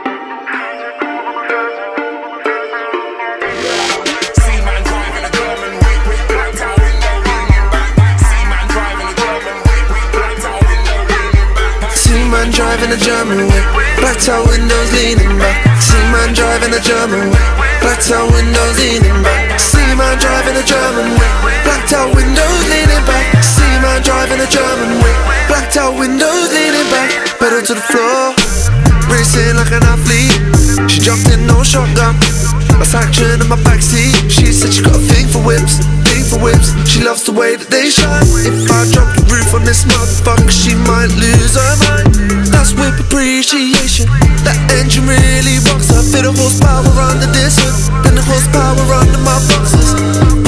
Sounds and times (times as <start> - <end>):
Music: 0.0 - 50.4.